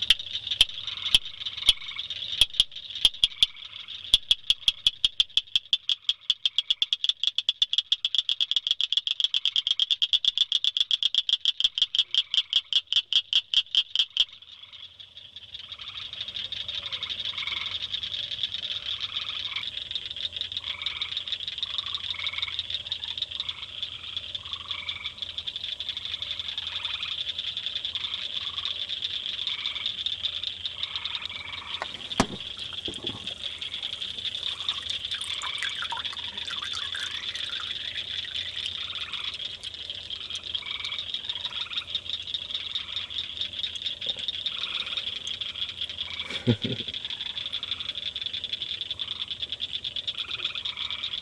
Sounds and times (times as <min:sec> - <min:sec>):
Frog: 0:00.0 - 0:51.2.